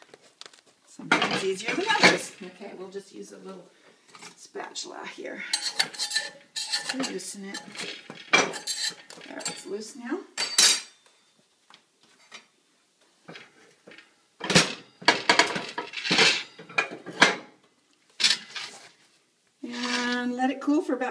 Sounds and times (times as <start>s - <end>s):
Cutlery, silverware: 5.5s - 9.7s, 10.4s - 11.0s.